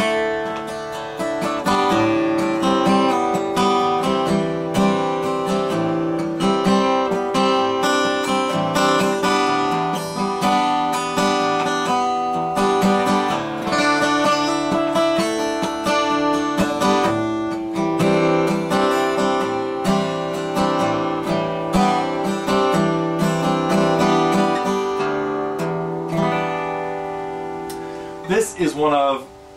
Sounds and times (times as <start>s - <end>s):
Strum: 0.0s - 29.5s.